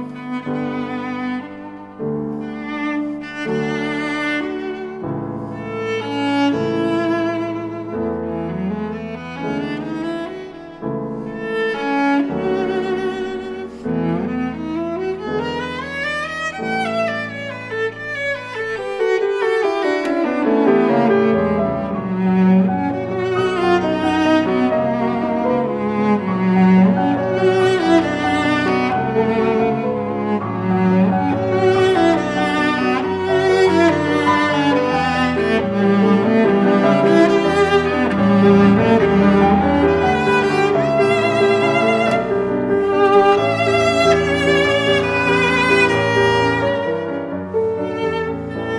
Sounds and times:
Violin, fiddle: 0.0s - 48.7s.

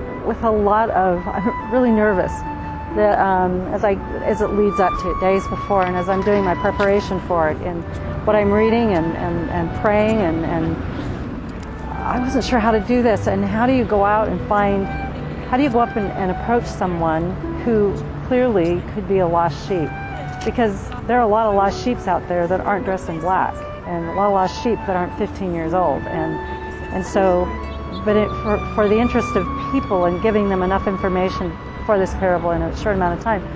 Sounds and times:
Music: 0.0s - 33.5s
Speech: 0.3s - 2.3s, 3.0s - 10.8s, 11.9s - 19.9s, 20.5s - 26.4s, 27.0s - 33.4s.

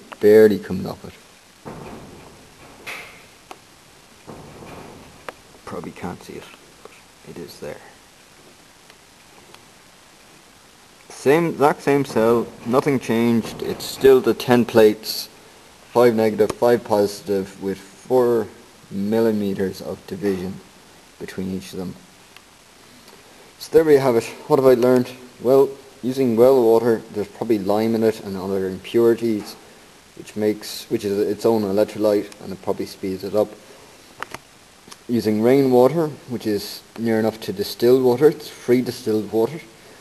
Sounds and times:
Speech: 0.0s - 1.3s, 5.6s - 6.6s, 7.2s - 8.0s, 11.1s - 22.1s, 23.6s - 29.6s, 30.2s - 33.6s, 35.0s - 39.8s.

